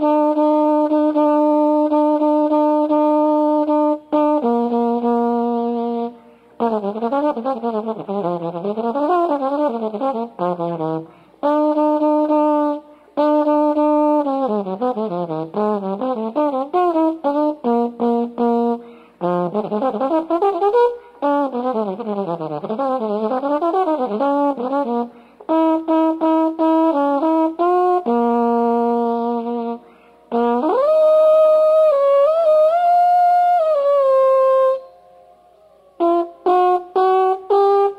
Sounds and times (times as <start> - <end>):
Music: 0.0 - 37.9.